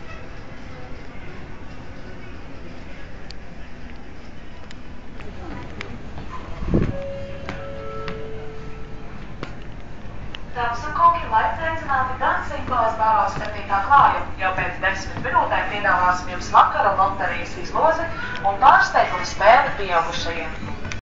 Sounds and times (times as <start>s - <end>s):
Speech: 10.6s - 20.6s.